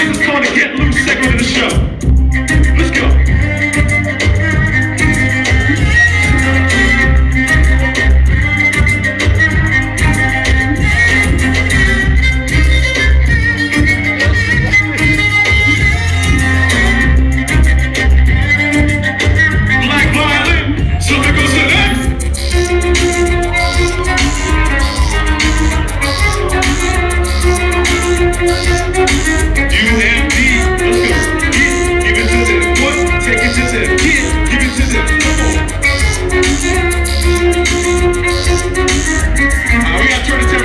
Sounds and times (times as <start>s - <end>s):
Speech: 0.0s - 1.9s, 2.7s - 3.2s, 19.8s - 22.1s, 29.8s - 35.5s, 39.8s - 40.6s
Violin, fiddle: 0.2s - 40.6s.